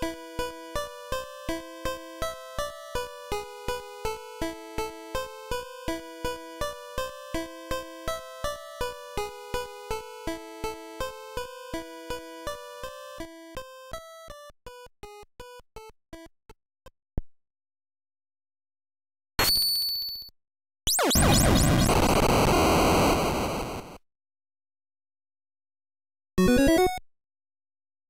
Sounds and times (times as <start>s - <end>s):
Music: 0.0s - 16.3s, 26.4s - 27.0s.